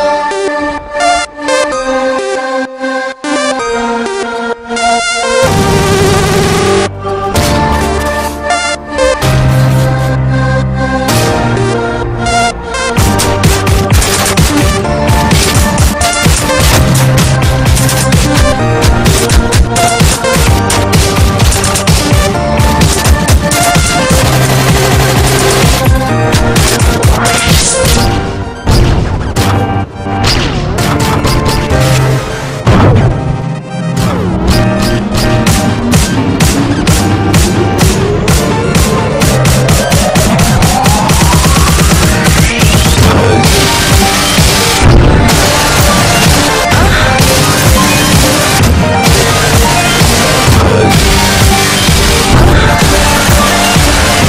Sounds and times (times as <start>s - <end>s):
Dubstep: 11.1s - 28.2s, 30.8s - 54.2s.